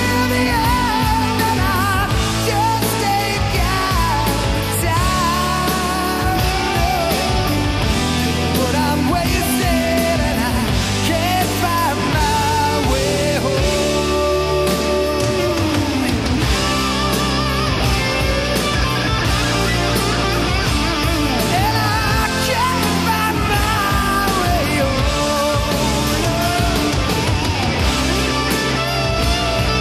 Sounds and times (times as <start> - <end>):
Punk rock: 0.0 - 29.8.